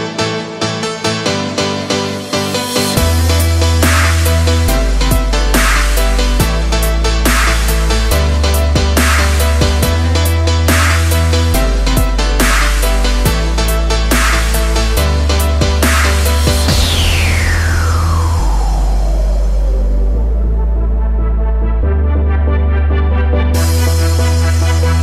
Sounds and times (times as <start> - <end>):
Dubstep: 0.0 - 21.9, 23.6 - 25.0.